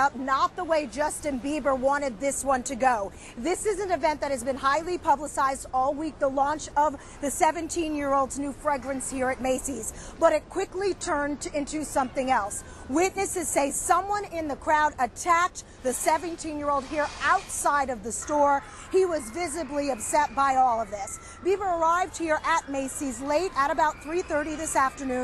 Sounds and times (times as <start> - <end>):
Speech: 0.0 - 25.2.